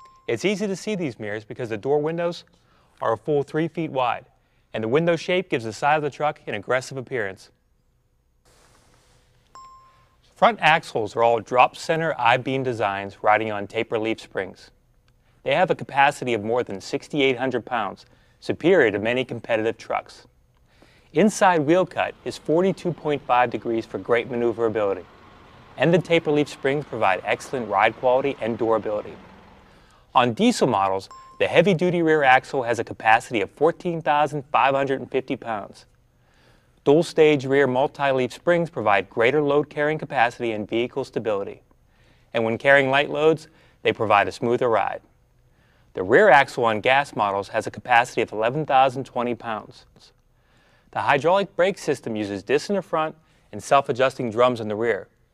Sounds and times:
Speech: 0.3s - 7.6s, 10.4s - 14.8s, 15.4s - 20.3s, 21.1s - 25.1s, 25.8s - 29.2s, 30.2s - 35.9s, 36.8s - 41.6s, 42.3s - 45.1s, 46.0s - 50.2s, 51.0s - 55.1s.

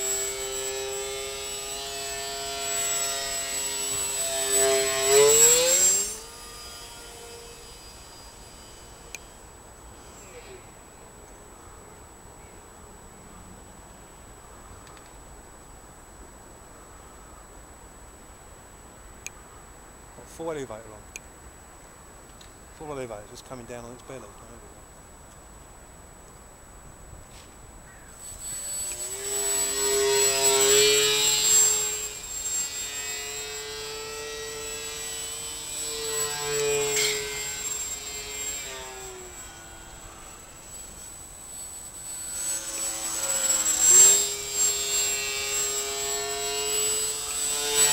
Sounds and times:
Aircraft: 0.0s - 15.2s, 27.3s - 47.9s
Outside, rural or natural: 0.0s - 47.9s
Speech: 20.2s - 21.1s, 22.8s - 24.8s.

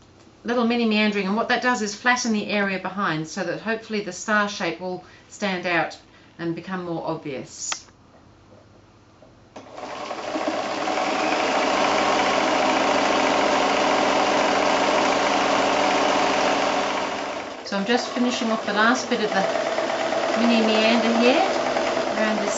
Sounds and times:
Speech: 0.5s - 7.9s, 17.7s - 19.5s, 20.4s - 21.6s, 22.2s - 22.5s
Light engine (high frequency): 9.7s - 22.5s.

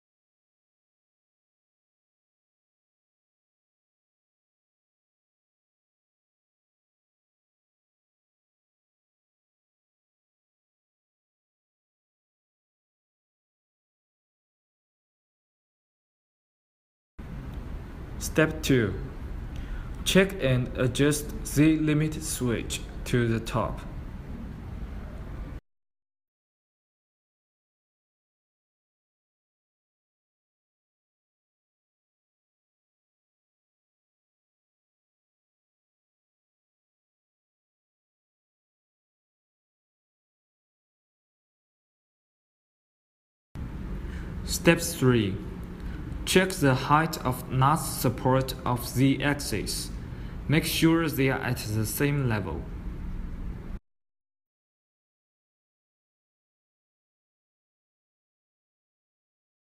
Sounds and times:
Speech: 18.2s - 19.2s, 20.0s - 24.0s, 44.4s - 45.5s, 46.2s - 52.7s.

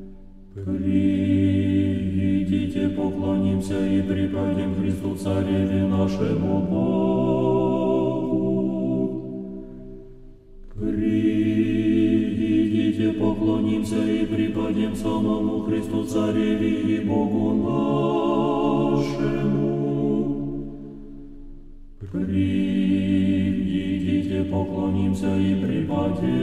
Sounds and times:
Mantra: 0.6s - 9.4s, 10.8s - 20.7s, 22.0s - 26.4s.

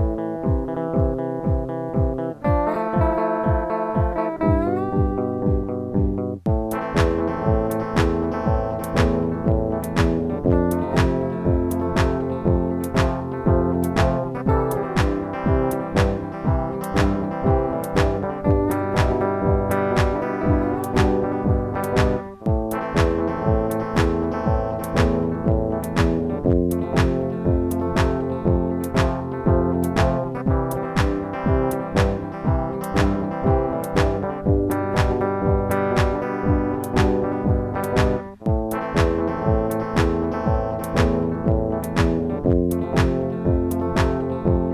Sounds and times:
Techno: 0.0s - 44.7s.

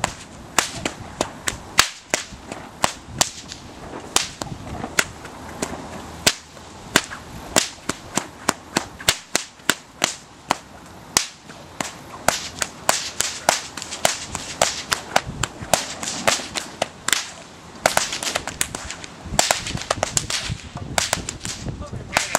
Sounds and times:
Whip: 0.0s - 3.6s, 4.2s - 10.6s, 11.2s - 22.3s.

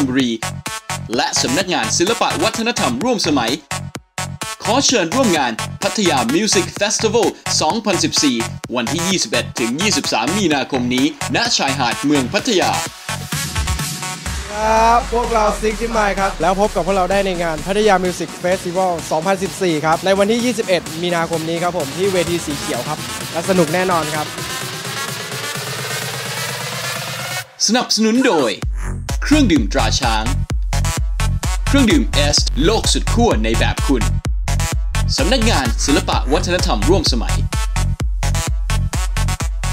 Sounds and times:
Speech: 0.0s - 0.4s, 1.1s - 3.6s, 4.6s - 12.9s, 14.4s - 24.3s, 27.6s - 28.6s, 29.2s - 30.4s, 31.7s - 34.1s, 35.1s - 37.4s
Exciting music: 0.0s - 39.7s
Soundtrack music: 0.0s - 39.7s.

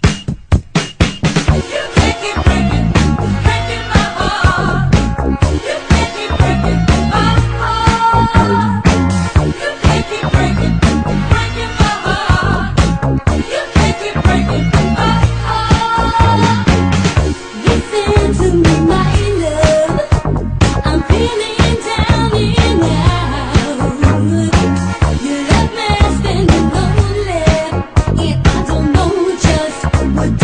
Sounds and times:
Music: 0.0s - 30.4s.

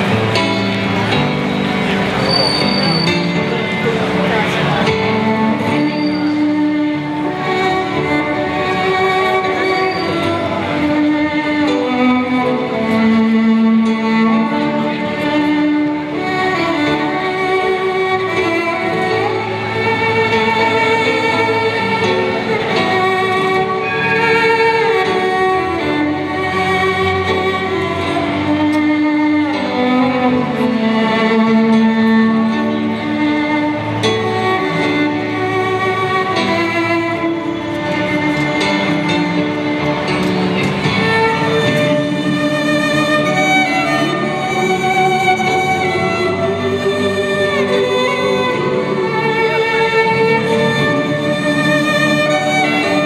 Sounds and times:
Violin, fiddle: 0.0s - 53.0s.

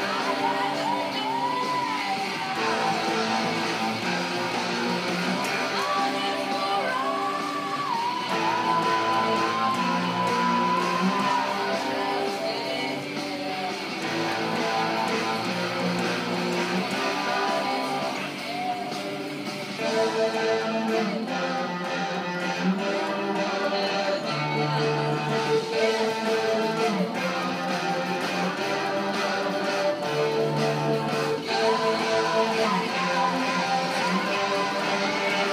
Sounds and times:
Guitar: 0.0s - 35.5s.

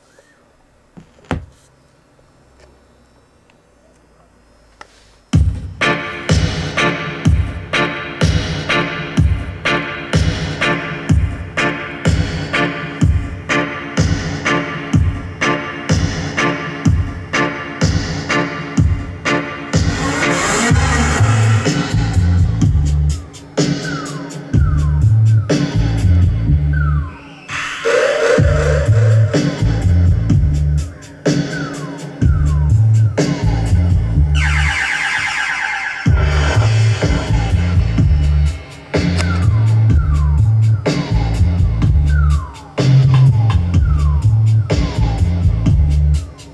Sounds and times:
Music: 5.3s - 35.3s, 36.0s - 46.5s.

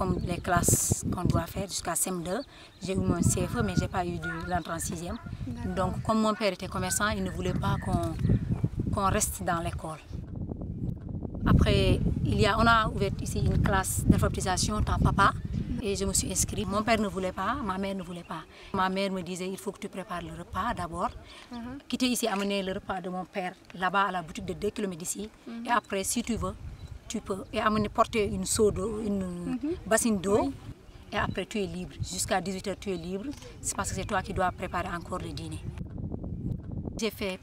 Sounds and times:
Speech: 0.0s - 8.2s, 11.5s - 30.6s, 31.2s - 35.7s, 37.0s - 37.4s.

